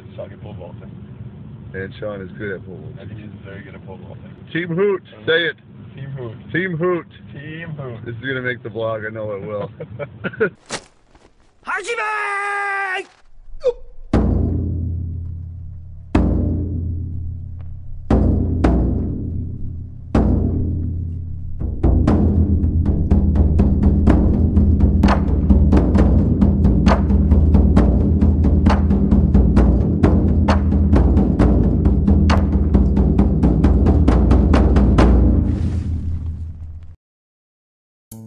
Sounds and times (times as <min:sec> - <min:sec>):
Speech: 0:00.0 - 0:00.9, 0:01.7 - 0:09.7, 0:11.7 - 0:13.8
Timpani: 0:13.6 - 0:36.8.